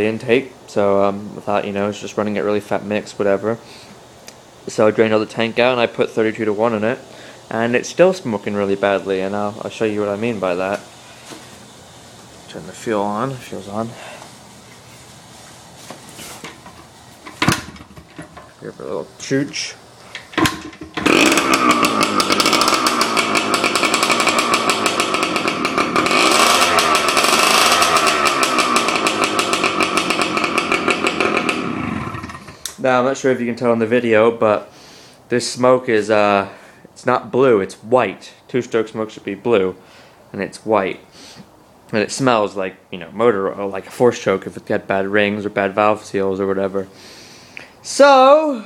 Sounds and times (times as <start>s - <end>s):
Speech: 0.0s - 3.6s, 4.7s - 10.9s, 12.5s - 14.1s, 18.6s - 19.8s, 32.8s - 34.7s, 35.3s - 41.1s, 41.9s - 46.9s, 47.8s - 48.6s
Motorcycle: 20.4s - 32.7s.